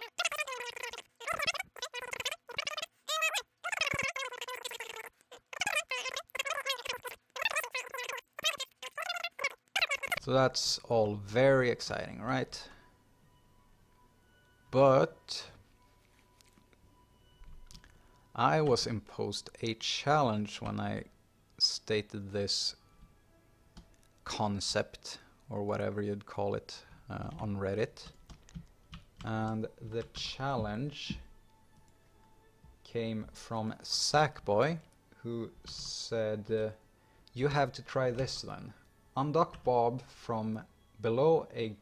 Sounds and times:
Speech: 10.1 - 12.7, 18.4 - 22.8, 24.3 - 28.1, 29.2 - 31.3, 32.9 - 36.8, 37.4 - 41.8.

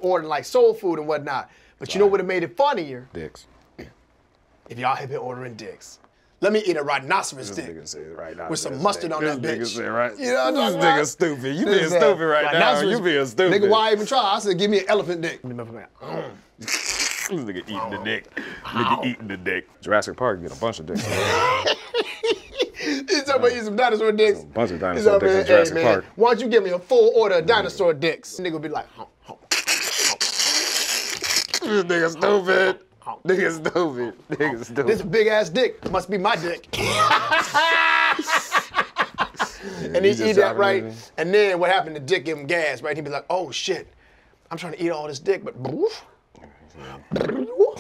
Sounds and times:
Inside, small room: 0.0 - 47.8.

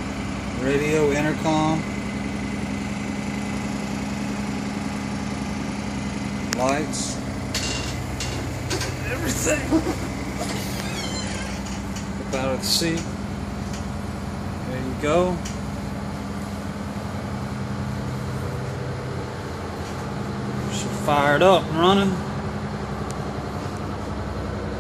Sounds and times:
Bus: 0.0 - 24.8
Speech: 0.6 - 1.9, 6.6 - 7.2, 9.0 - 9.8, 12.2 - 13.1, 14.6 - 15.5, 20.7 - 22.2.

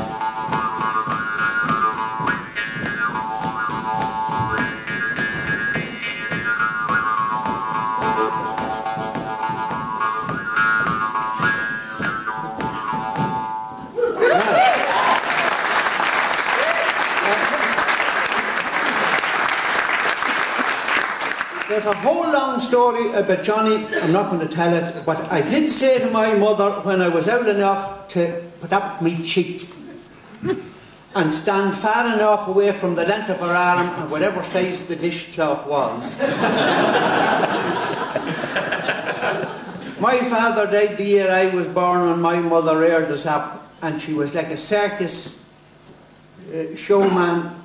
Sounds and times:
Music: 0.0 - 14.0.

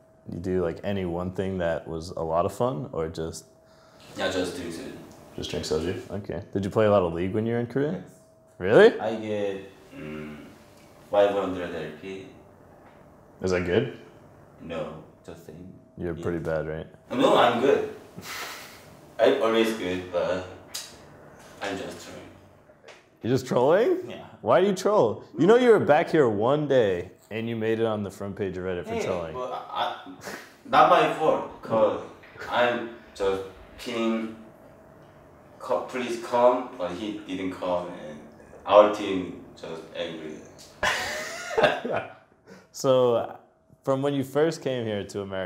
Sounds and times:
Speech: 0.3 - 3.4, 4.2 - 9.7, 14.6 - 17.9, 19.2 - 20.6, 21.6 - 22.3, 23.2 - 30.0, 30.7 - 34.4, 35.6 - 40.5, 42.8 - 45.4.

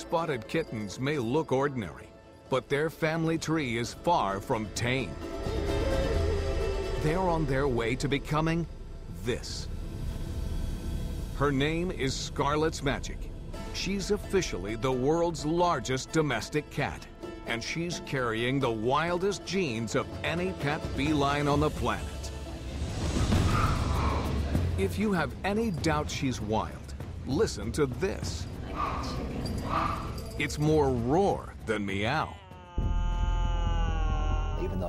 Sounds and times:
Music: 0.0 - 34.8
Speech: 7.0 - 9.7, 11.4 - 13.2, 13.8 - 22.2, 24.8 - 28.9, 30.4 - 34.8.

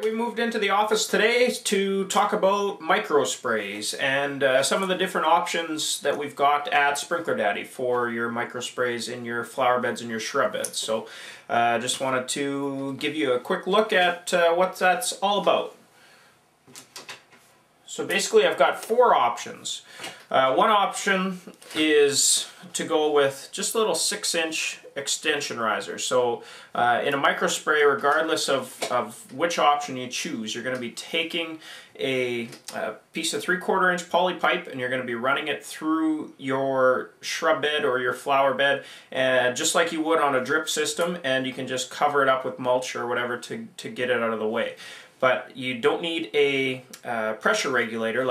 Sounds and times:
Speech: 0.0 - 15.8, 17.9 - 48.3.

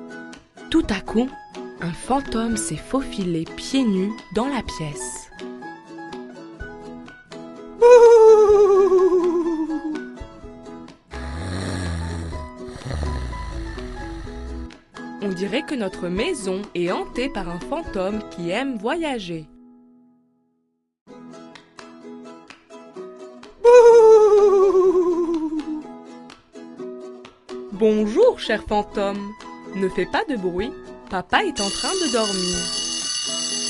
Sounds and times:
Music: 0.0 - 33.6
Speech: 0.7 - 5.3, 15.2 - 19.5, 27.7 - 32.7.

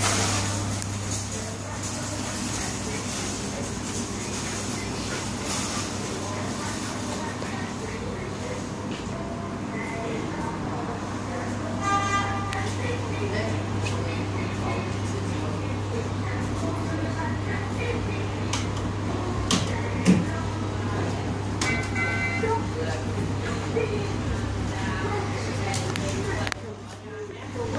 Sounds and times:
Speech: 0.0 - 27.7.

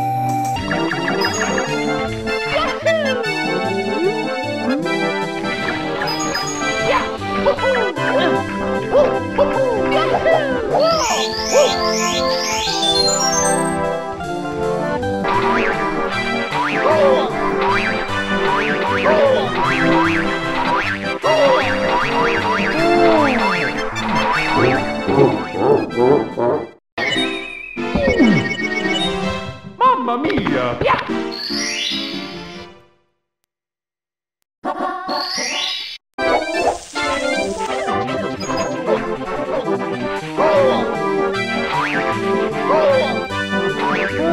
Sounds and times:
Music: 0.0 - 33.2, 36.2 - 44.3.

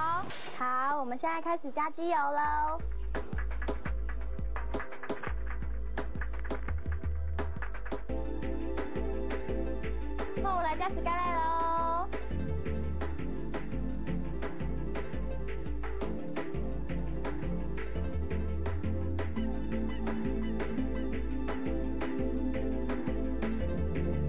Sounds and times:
Speech: 0.0 - 2.8, 10.4 - 12.1
Music: 0.0 - 24.2.

